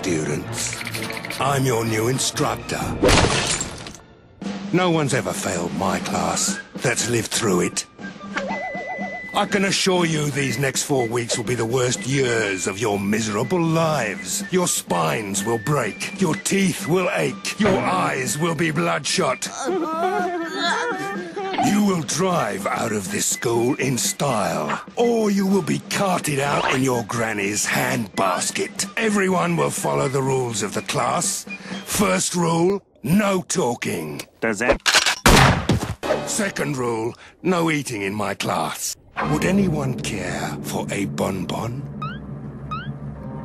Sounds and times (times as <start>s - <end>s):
Speech: 0.0s - 0.7s, 1.4s - 3.0s, 4.7s - 7.9s, 9.4s - 19.8s, 21.6s - 34.8s, 36.3s - 41.8s
Music: 0.0s - 33.0s, 36.0s - 38.3s, 39.0s - 43.4s.